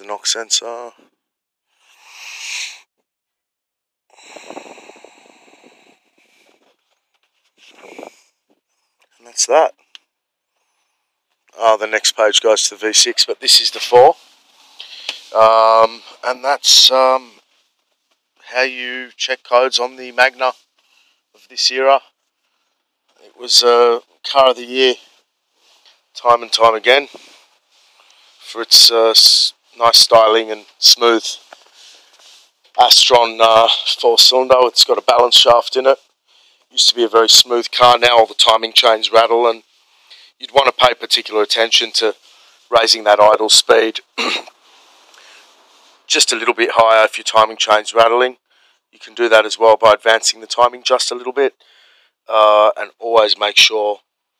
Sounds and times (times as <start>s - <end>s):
Speech: 0.0s - 1.0s, 9.2s - 9.8s, 11.5s - 14.2s, 14.8s - 17.4s, 18.4s - 20.6s, 21.4s - 22.0s, 23.2s - 25.1s, 26.1s - 27.3s, 28.4s - 31.4s, 32.8s - 36.0s, 36.7s - 44.5s, 46.1s - 48.4s, 49.0s - 51.6s, 52.3s - 54.0s.